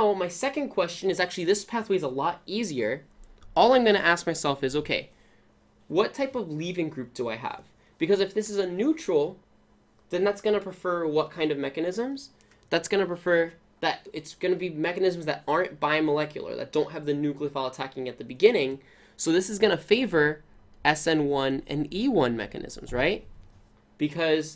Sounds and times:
Speech: 0:00.0 - 0:05.1, 0:05.9 - 0:09.4, 0:10.1 - 0:23.3, 0:24.0 - 0:24.5.

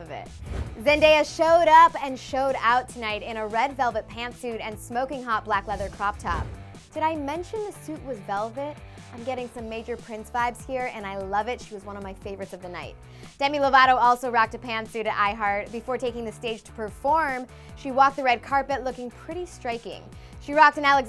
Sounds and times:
Music: 0:00.0 - 0:21.0
Speech: 0:00.0 - 0:21.0.

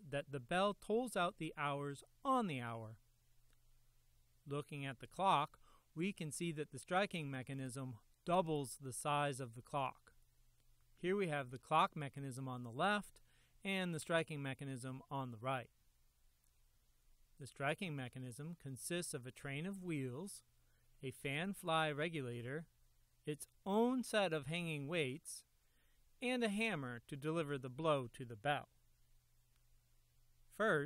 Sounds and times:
Speech: 0:00.0 - 0:03.0, 0:04.5 - 0:10.2, 0:11.0 - 0:15.7, 0:17.4 - 0:22.7, 0:23.3 - 0:25.5, 0:26.2 - 0:28.7, 0:30.5 - 0:30.8.

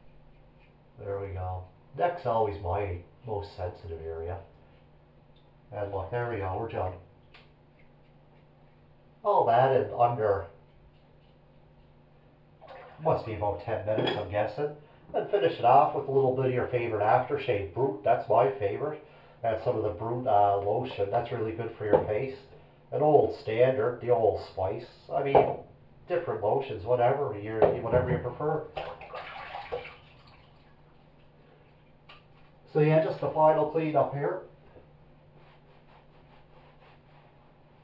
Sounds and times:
Speech: 0:01.0 - 0:04.5, 0:05.7 - 0:07.1, 0:09.2 - 0:10.6, 0:13.0 - 0:28.8, 0:32.7 - 0:34.5.

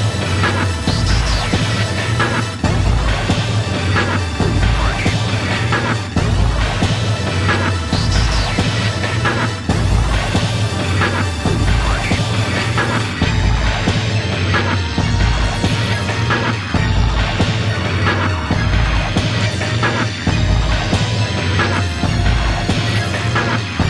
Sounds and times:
Soundtrack music: 0:00.0 - 0:23.8
Theme music: 0:00.0 - 0:23.8
Video game music: 0:00.0 - 0:23.8.

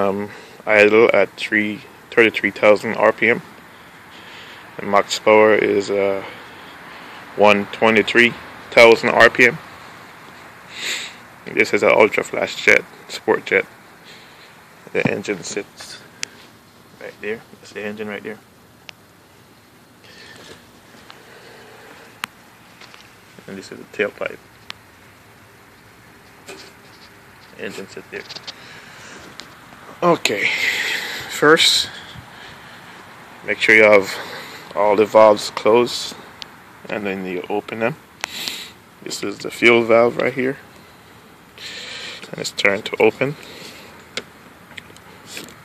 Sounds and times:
Speech: 0:00.0 - 0:03.4, 0:04.8 - 0:06.4, 0:07.4 - 0:09.6, 0:11.5 - 0:13.7, 0:14.9 - 0:16.1, 0:17.0 - 0:18.4, 0:23.4 - 0:24.4, 0:27.6 - 0:28.3, 0:30.0 - 0:32.0, 0:33.5 - 0:34.2, 0:34.8 - 0:36.2, 0:36.9 - 0:38.0, 0:39.0 - 0:40.6, 0:42.3 - 0:43.4.

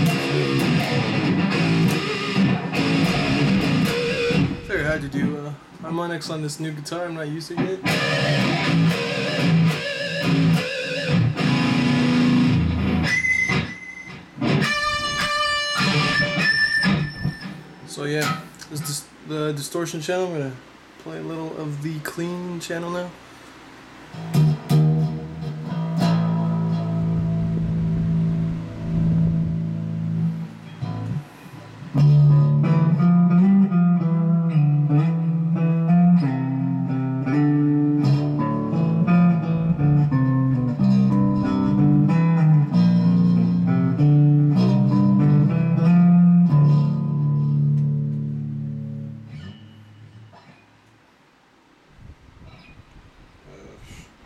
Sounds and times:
Bass guitar: 0:00.0 - 0:05.6, 0:07.6 - 0:17.6, 0:24.1 - 0:50.5.

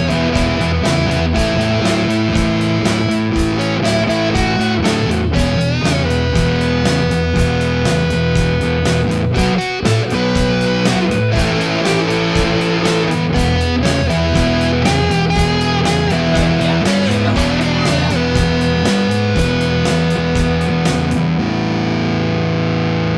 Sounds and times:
Music: 0:00.0 - 0:23.1.

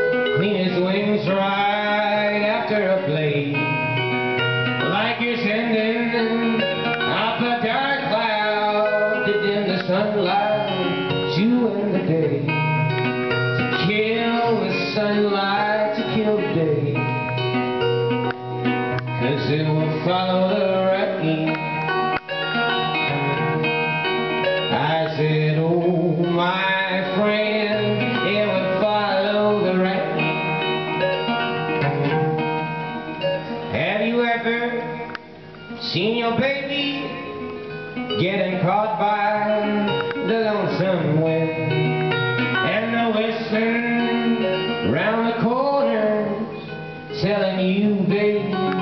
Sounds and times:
Music: 0:00.0 - 0:48.8.

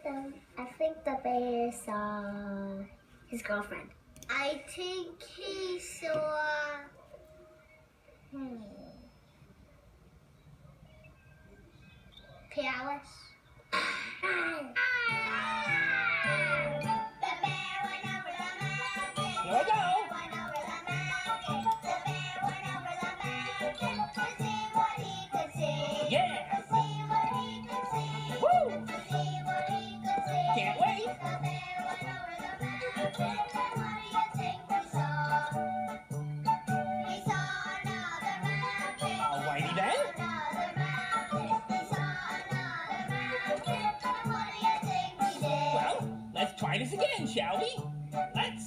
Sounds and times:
Music: 0:02.9 - 0:08.4, 0:09.1 - 0:12.6, 0:13.2 - 0:48.6.

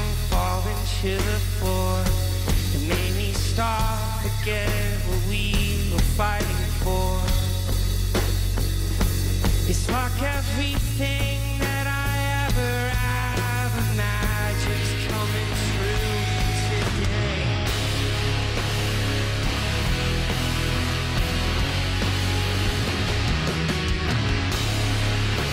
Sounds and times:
Grunge: 0:00.0 - 0:25.5
Singing: 0:09.7 - 0:17.7.

